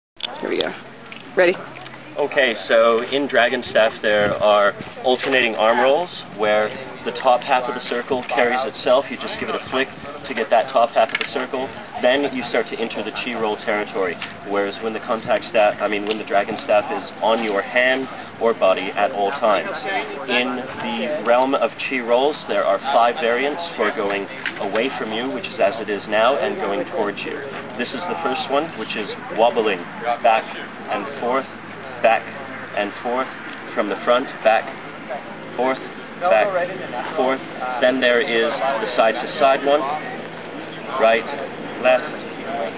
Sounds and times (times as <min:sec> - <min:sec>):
Speech: 0:00.2 - 0:00.8, 0:01.4 - 0:42.7.